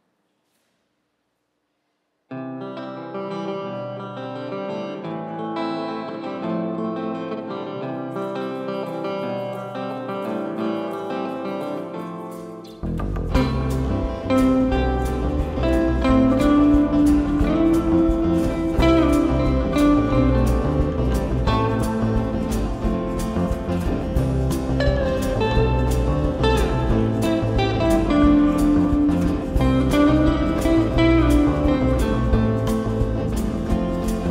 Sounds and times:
Strum: 8.0 - 34.3.

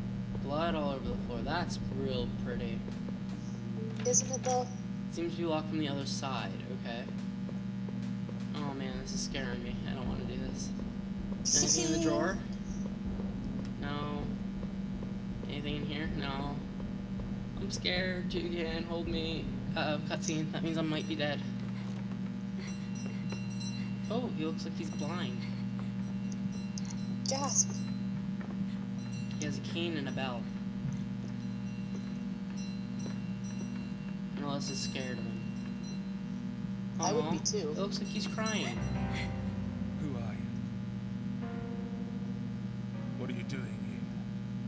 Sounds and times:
Speech: 0.5 - 2.8, 4.0 - 7.1, 8.6 - 10.7, 11.5 - 12.5, 13.8 - 14.3, 15.5 - 16.6, 17.6 - 21.5, 24.1 - 25.4, 27.3 - 27.7, 29.4 - 30.5, 34.4 - 35.4, 37.0 - 38.8, 40.0 - 40.5, 43.2 - 44.2.

